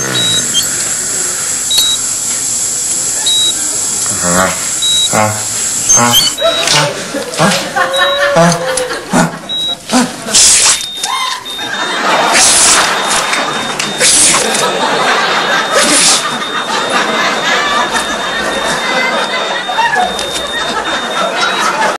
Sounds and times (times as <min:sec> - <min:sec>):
Sneeze: 0:10.0 - 0:10.8, 0:12.3 - 0:12.8, 0:14.0 - 0:14.4, 0:15.8 - 0:16.3.